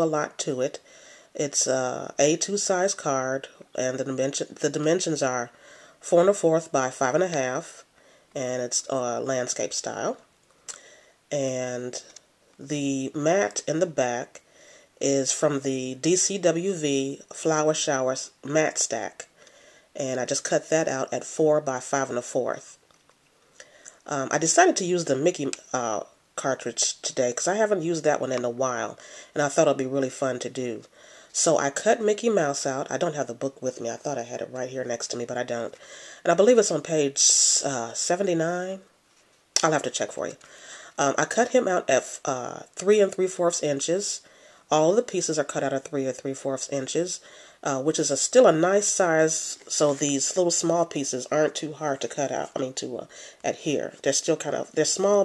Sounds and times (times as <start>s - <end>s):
Speech: 0.0s - 14.4s, 15.0s - 19.4s, 20.0s - 22.8s, 24.0s - 38.9s, 39.6s - 55.2s.